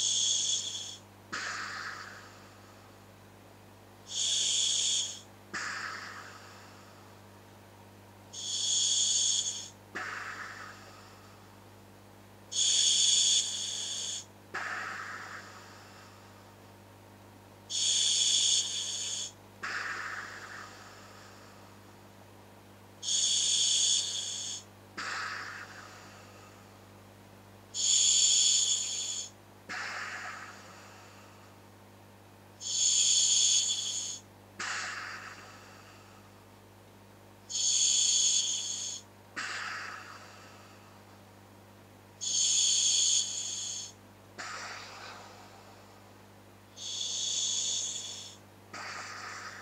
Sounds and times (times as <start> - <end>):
Inside, small room: 0.0 - 49.6.